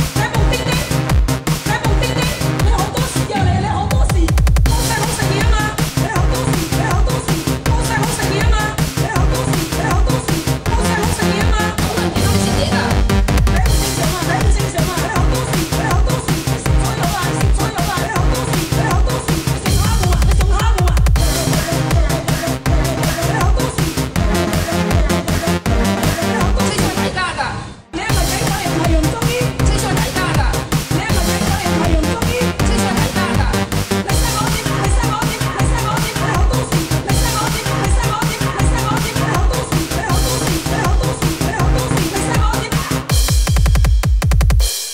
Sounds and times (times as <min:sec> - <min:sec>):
Techno: 0:00.0 - 0:44.9.